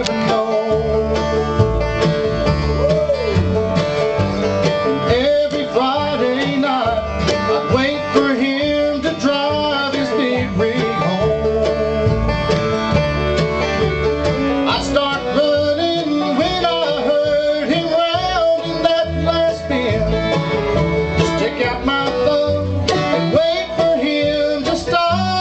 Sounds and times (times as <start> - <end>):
Guitar: 0.0 - 25.4.